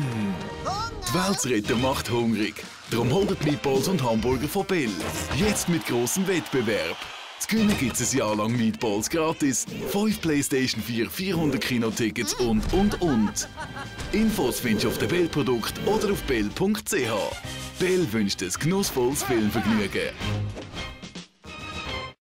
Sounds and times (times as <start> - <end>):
Music: 0.0 - 22.2
Speech: 0.7 - 13.5, 14.1 - 20.2.